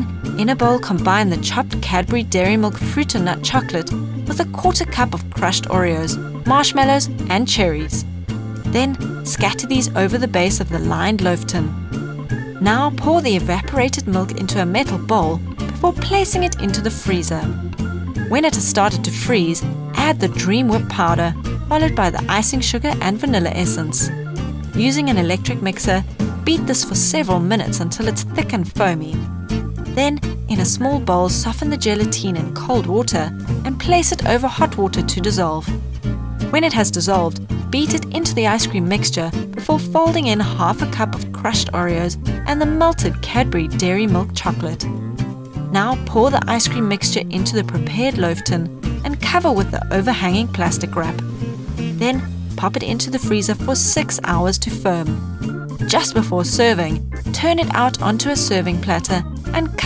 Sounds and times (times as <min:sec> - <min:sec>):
Speech: 0:00.0 - 0:08.0, 0:08.7 - 0:11.7, 0:12.6 - 0:17.6, 0:18.3 - 0:24.1, 0:24.8 - 0:29.2, 0:30.0 - 0:35.7, 0:36.5 - 0:44.9, 0:45.7 - 0:51.2, 0:52.0 - 0:55.2, 0:55.9 - 0:59.8
Music: 0:00.0 - 0:59.8.